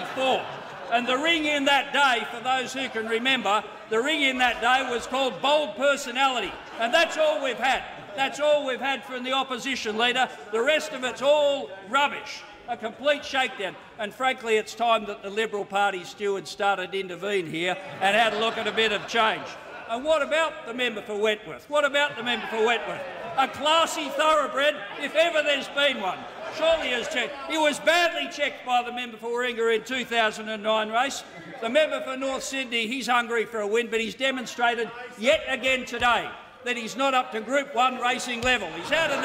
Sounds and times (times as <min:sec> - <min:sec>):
Speech: 0:00.0 - 0:39.2.